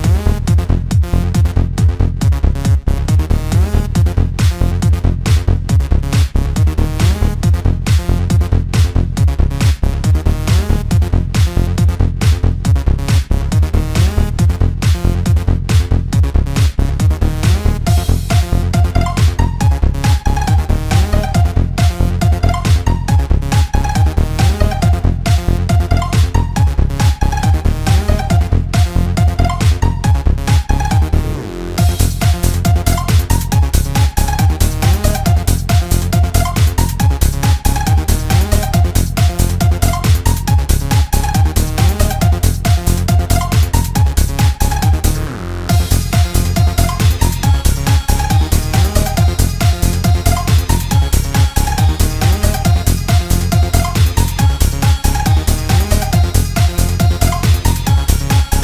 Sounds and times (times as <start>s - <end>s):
Techno: 0.0s - 58.6s.